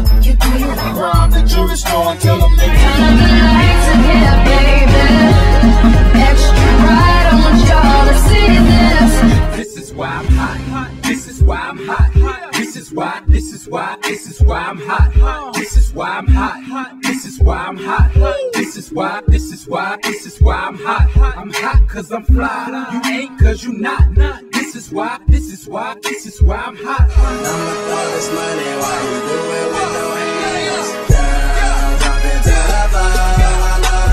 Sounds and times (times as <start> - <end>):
Music: 0.0 - 34.1.